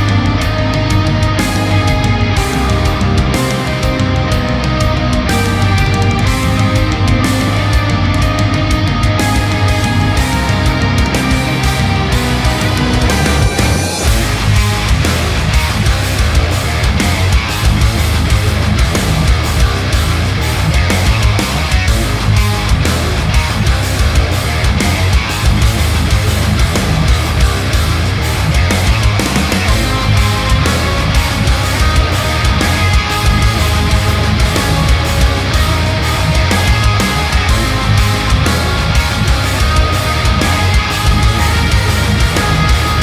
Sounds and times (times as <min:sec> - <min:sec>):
Music: 0:00.0 - 0:43.0.